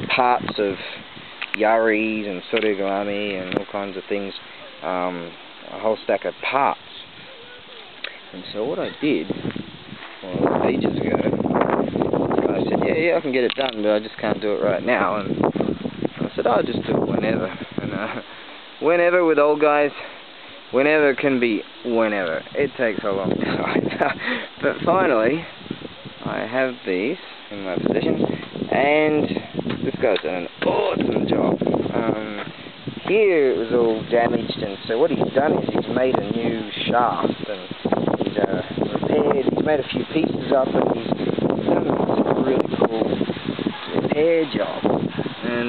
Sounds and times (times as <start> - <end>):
Speech: 0.0 - 0.9, 1.5 - 7.7, 8.3 - 9.3, 10.2 - 11.4, 12.4 - 15.4, 16.2 - 18.1, 18.8 - 20.1, 20.7 - 24.0, 24.6 - 25.5, 26.2 - 32.5, 33.1 - 37.7, 38.3 - 41.1, 41.7 - 43.1, 43.7 - 44.8, 45.4 - 45.6
Outside, rural or natural: 0.0 - 45.6.